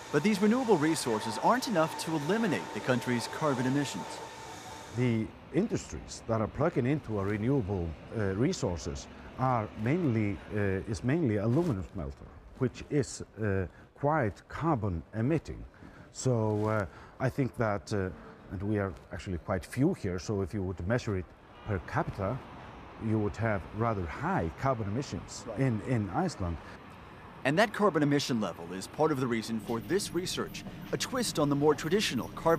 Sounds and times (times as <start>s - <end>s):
Speech: 0.2s - 4.2s, 5.0s - 22.4s, 23.0s - 26.6s, 27.4s - 32.5s.